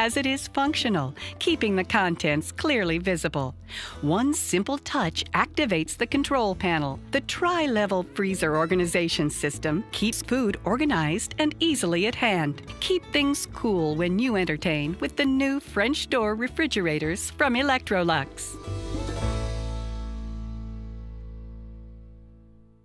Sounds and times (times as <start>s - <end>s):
Speech: 0.0s - 18.6s
Music: 0.0s - 22.8s.